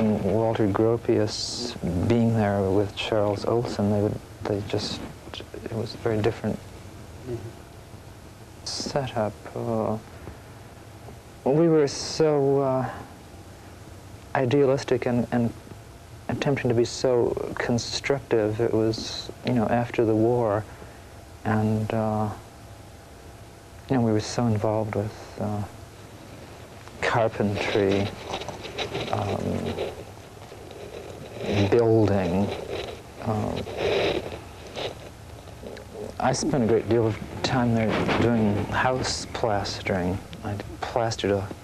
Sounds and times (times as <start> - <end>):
Speech: 0.0 - 6.6, 7.2 - 7.5, 8.7 - 10.0, 11.4 - 13.1, 14.3 - 15.6, 16.3 - 20.7, 21.4 - 22.5, 23.9 - 25.8, 27.0 - 28.2, 29.1 - 30.0, 31.4 - 32.6, 33.2 - 33.9, 35.7 - 41.6.